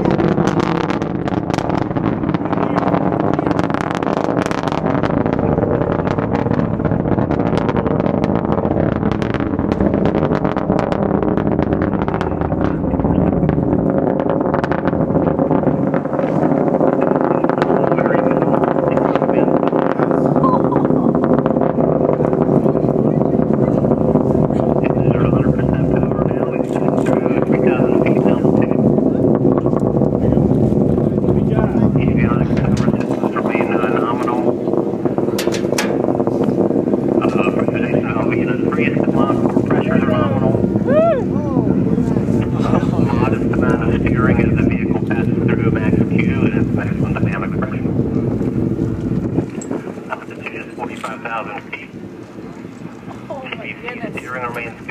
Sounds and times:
Vehicle: 0.0 - 54.9.

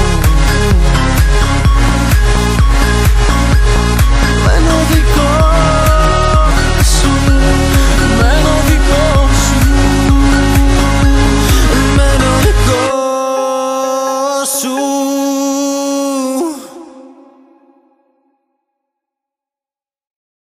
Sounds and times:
Music: 0.0 - 18.7.

